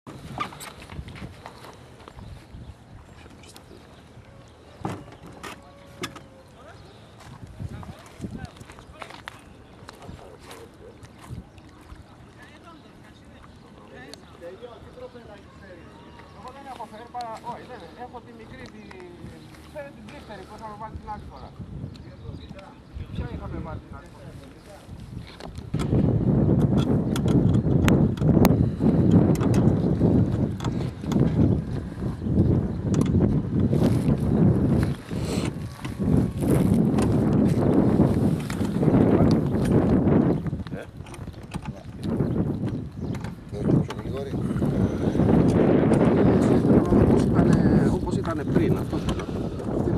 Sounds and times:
Outside, rural or natural: 0.0s - 49.9s.

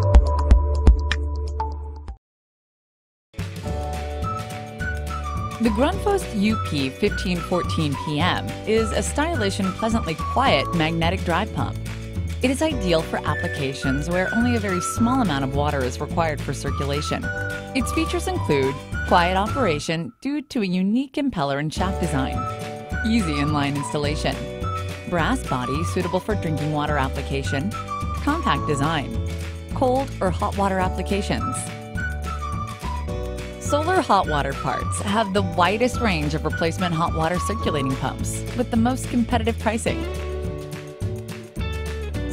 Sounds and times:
Music: 0.0s - 2.2s, 3.4s - 20.3s, 21.7s - 42.3s
Speech: 5.6s - 11.8s, 12.4s - 22.4s, 23.0s - 24.5s, 25.1s - 29.2s, 29.8s - 31.7s, 33.6s - 40.1s.

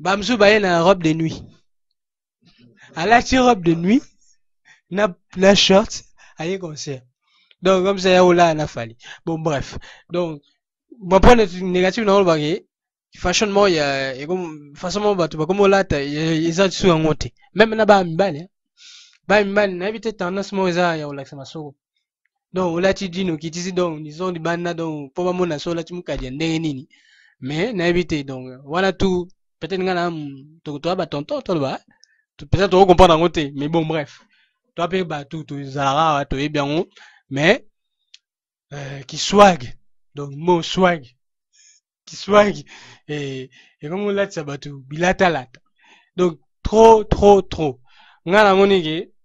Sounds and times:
Speech: 0.0s - 1.5s, 2.8s - 4.1s, 4.9s - 7.0s, 7.6s - 10.4s, 11.0s - 12.6s, 13.2s - 18.5s, 19.3s - 21.8s, 22.6s - 31.8s, 32.4s - 34.2s, 34.8s - 37.6s, 38.7s - 41.1s, 42.1s - 45.6s, 46.2s - 49.1s.

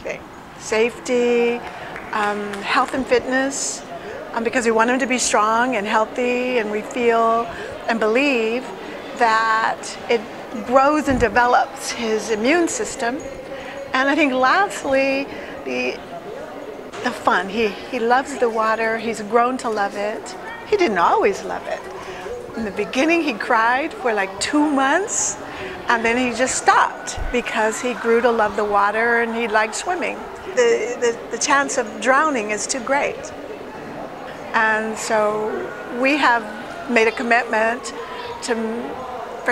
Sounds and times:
Female speech, woman speaking: 0.0s - 16.0s, 17.0s - 33.3s, 34.5s - 39.5s.

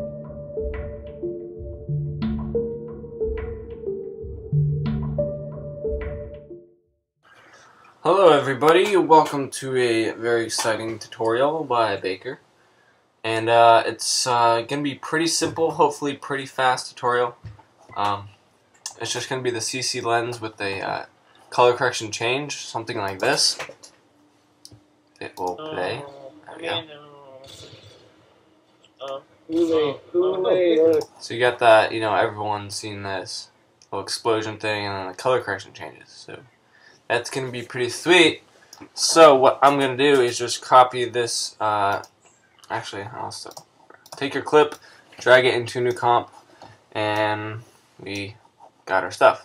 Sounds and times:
Speech: 8.0s - 12.4s, 13.2s - 18.3s, 18.9s - 23.8s, 25.2s - 27.8s, 29.0s - 36.5s, 37.1s - 38.4s, 39.0s - 42.1s, 42.7s - 43.6s, 44.2s - 46.3s, 47.0s - 49.4s.

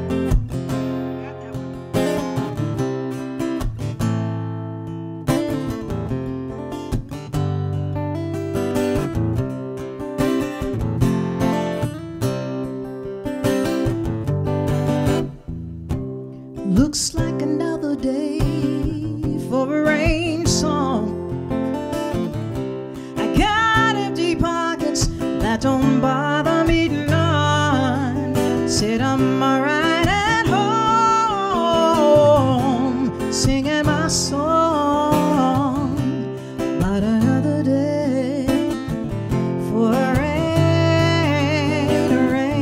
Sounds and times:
Music: 0.0s - 42.6s.

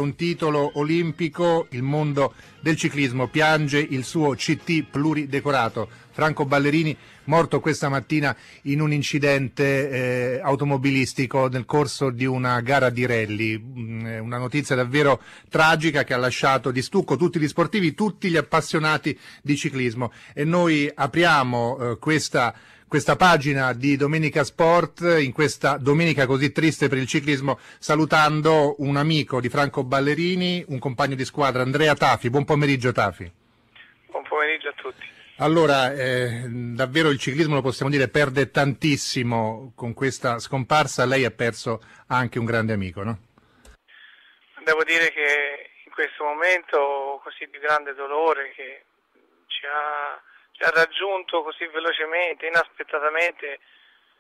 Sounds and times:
Speech: 0.0s - 43.2s, 44.6s - 48.9s, 49.5s - 53.6s.

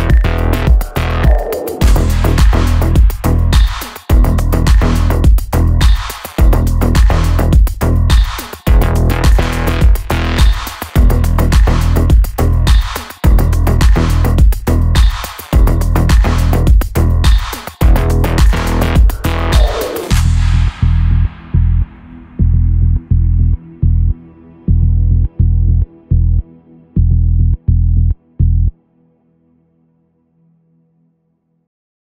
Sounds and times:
Electronica: 0.0s - 29.0s.

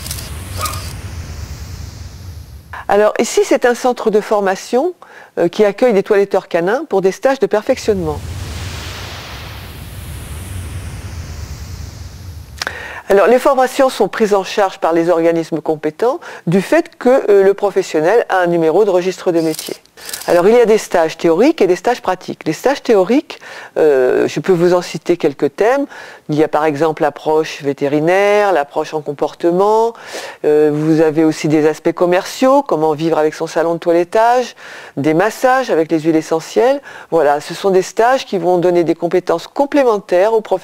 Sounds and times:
Speech: 2.8s - 8.2s, 13.1s - 40.6s.

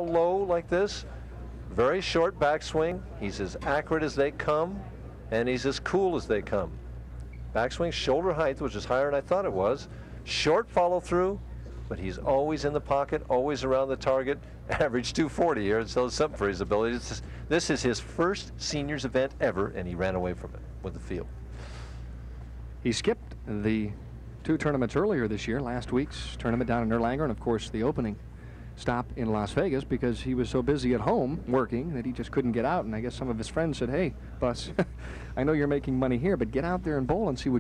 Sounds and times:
Speech: 0.0s - 6.8s, 7.5s - 21.3s, 22.8s - 28.2s, 28.8s - 37.6s.

